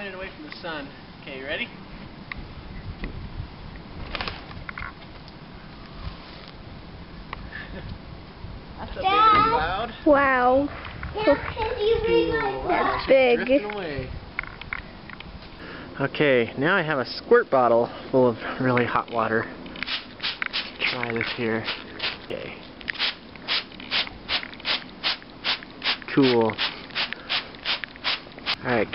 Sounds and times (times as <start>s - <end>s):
Speech: 20.8s - 21.7s, 28.6s - 28.9s.